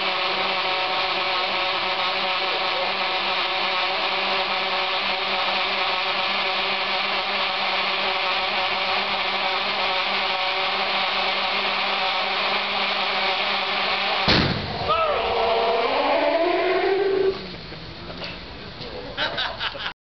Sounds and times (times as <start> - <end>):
Burst, pop: 14.2 - 14.8.